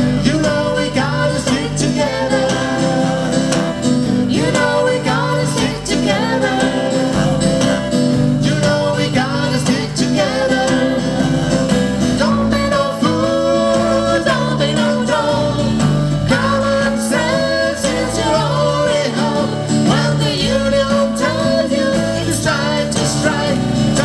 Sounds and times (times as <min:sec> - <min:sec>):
Guitar: 0:00.0 - 0:24.0
Singing: 0:00.0 - 0:24.0.